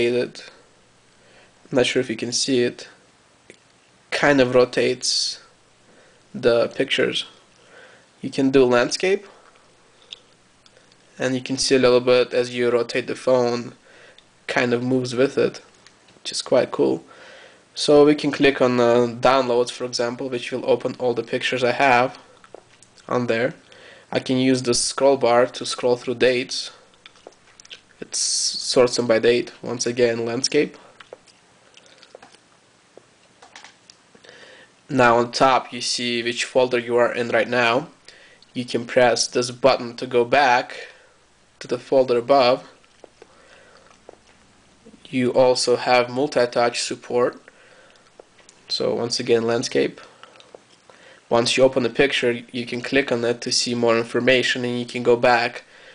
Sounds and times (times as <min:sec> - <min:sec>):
Speech: 0:00.0 - 0:00.6, 0:01.7 - 0:03.0, 0:04.1 - 0:05.5, 0:06.3 - 0:07.4, 0:08.2 - 0:09.4, 0:11.2 - 0:13.8, 0:14.5 - 0:17.1, 0:17.8 - 0:22.3, 0:23.0 - 0:26.8, 0:28.0 - 0:30.9, 0:34.9 - 0:41.0, 0:41.6 - 0:42.8, 0:44.9 - 0:47.5, 0:48.7 - 0:50.1, 0:51.3 - 0:55.7
Inside, small room: 0:00.0 - 0:55.9.